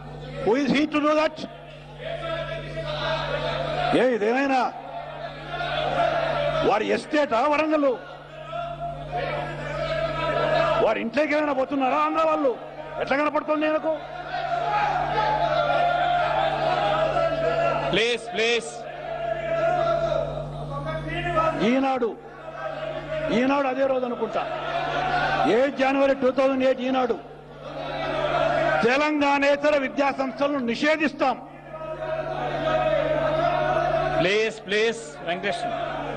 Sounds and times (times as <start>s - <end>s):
Male speech, man speaking: 0.2s - 4.8s, 6.6s - 14.0s, 17.9s - 18.8s, 19.4s - 24.5s, 25.4s - 27.2s, 28.8s - 31.9s, 34.1s - 35.9s
Narration, monologue: 0.4s - 2.8s, 6.6s - 9.6s, 10.8s - 14.0s, 20.4s - 22.3s, 25.4s - 27.5s, 28.8s - 31.6s.